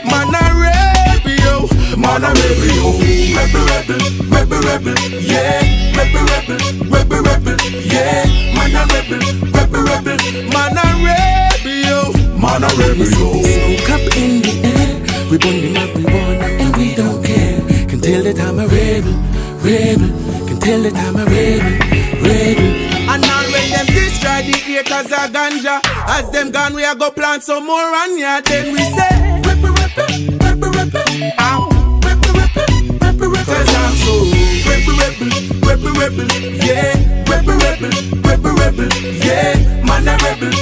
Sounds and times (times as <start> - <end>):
Reggae: 0.0 - 40.6.